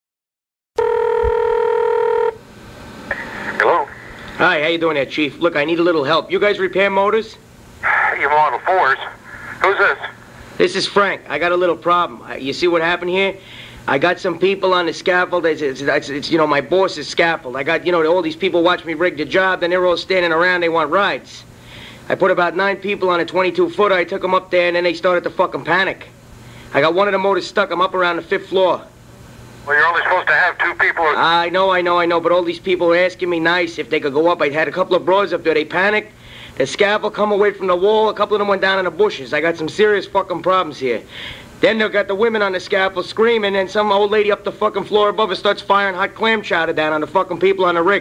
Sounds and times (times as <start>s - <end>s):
Telephone bell ringing: 0.8s - 2.4s
Speech: 3.6s - 21.4s, 22.1s - 26.1s, 26.7s - 28.9s, 29.6s - 41.0s, 41.6s - 48.0s.